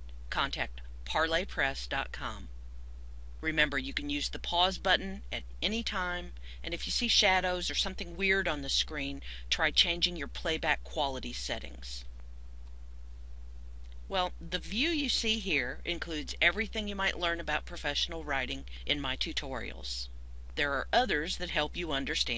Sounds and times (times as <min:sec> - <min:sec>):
Speech: 0:00.3 - 0:02.5, 0:03.4 - 0:12.0, 0:14.1 - 0:22.3.